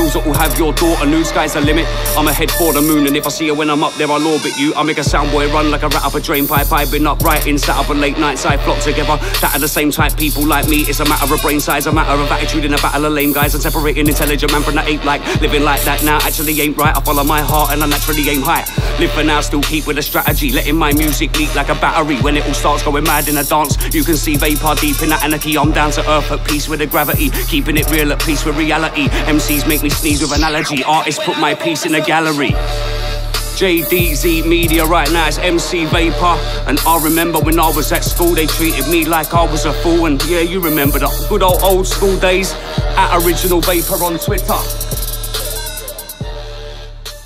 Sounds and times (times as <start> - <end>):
Hip hop music: 0.0 - 47.2
Rapping: 0.0 - 47.2.